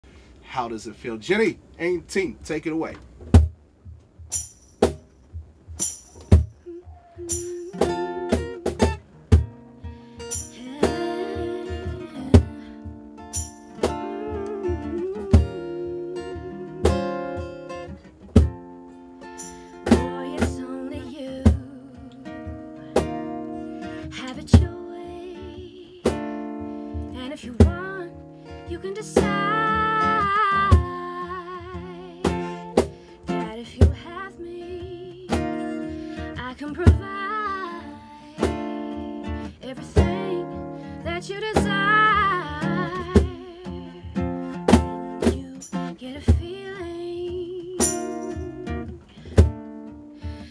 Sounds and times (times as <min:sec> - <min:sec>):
Inside, small room: 0:00.0 - 0:50.5
Speech: 0:00.5 - 0:03.0
Music: 0:03.4 - 0:50.5.